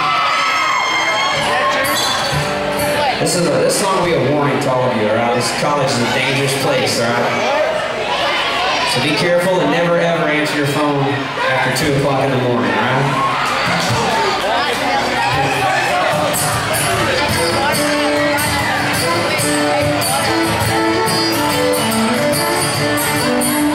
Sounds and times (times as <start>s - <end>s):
Music: 0.1s - 4.7s, 15.2s - 23.7s
Speech: 3.0s - 7.8s, 8.9s - 13.2s.